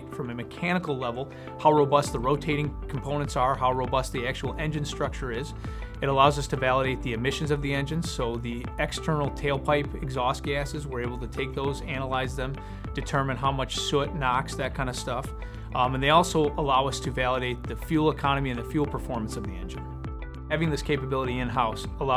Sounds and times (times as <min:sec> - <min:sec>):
Speech: 0:00.0 - 0:19.8, 0:20.5 - 0:22.1
Music: 0:00.0 - 0:22.1.